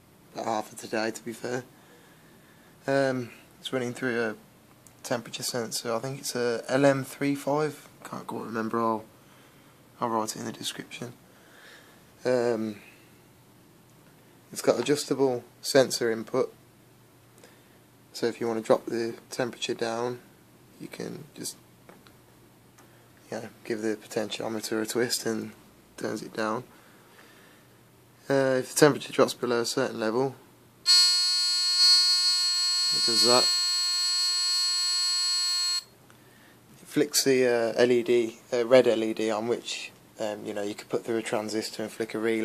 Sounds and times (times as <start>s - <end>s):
Inside, small room: 0.0s - 42.4s
Speech: 0.4s - 1.7s, 2.8s - 4.4s, 5.0s - 9.1s, 10.0s - 11.2s, 12.2s - 12.9s, 14.5s - 16.6s, 18.1s - 21.6s, 23.2s - 26.7s, 28.2s - 30.4s, 32.9s - 33.6s, 36.8s - 42.4s.